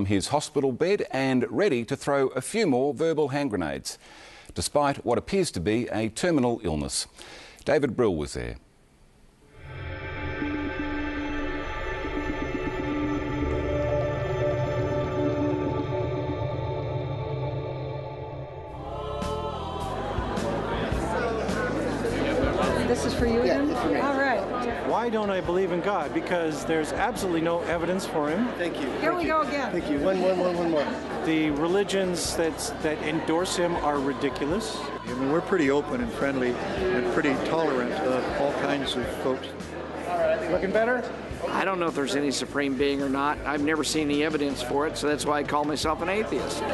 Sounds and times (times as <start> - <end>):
Music: 9.6 - 46.7.